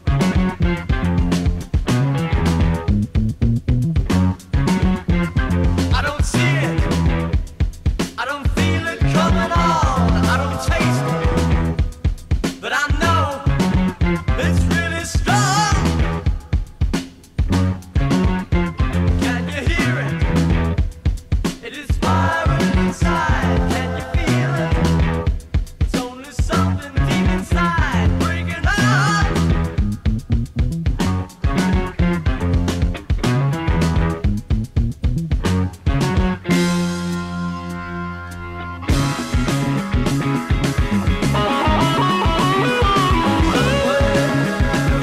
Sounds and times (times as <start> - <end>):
Music: 0.0 - 45.0.